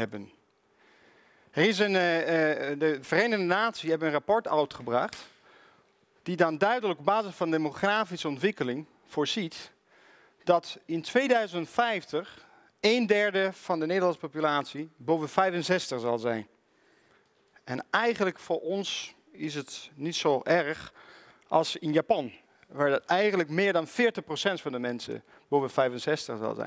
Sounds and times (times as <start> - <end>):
Speech: 0.0 - 0.4, 1.6 - 5.3, 6.3 - 9.8, 10.4 - 16.5, 17.6 - 26.6.